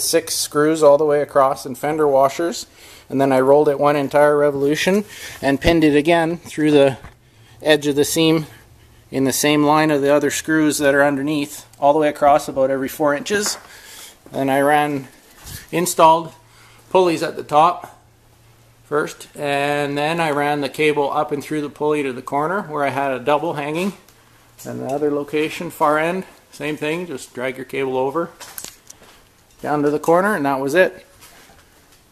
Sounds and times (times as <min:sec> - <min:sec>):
Speech: 0:00.0 - 0:13.6, 0:14.3 - 0:15.1, 0:15.7 - 0:18.0, 0:18.9 - 0:24.0, 0:24.6 - 0:28.4, 0:29.6 - 0:31.1.